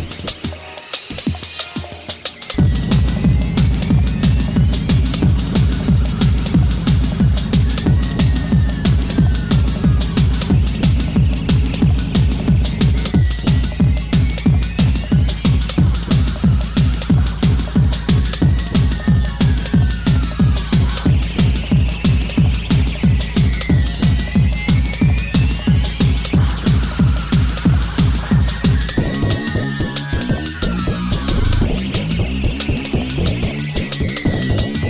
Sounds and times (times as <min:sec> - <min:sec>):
Techno: 0:00.0 - 0:34.9.